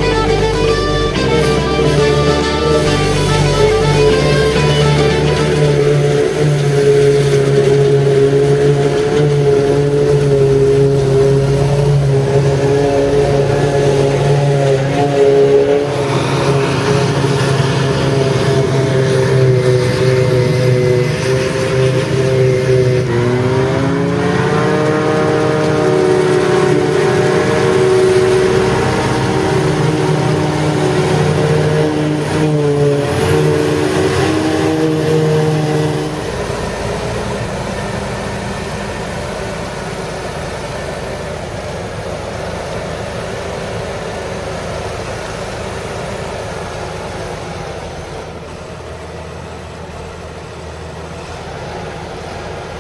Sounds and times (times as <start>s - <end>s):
Vehicle: 0.0s - 52.8s.